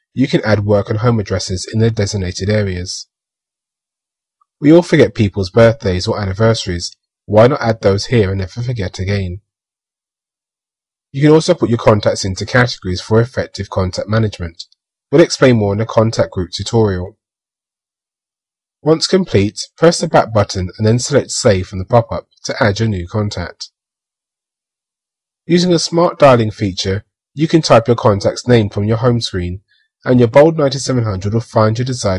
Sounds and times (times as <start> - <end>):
Inside, small room: 0.0 - 32.1
Speech: 0.2 - 3.1, 4.6 - 9.4, 11.2 - 17.1, 18.8 - 23.7, 25.5 - 32.1.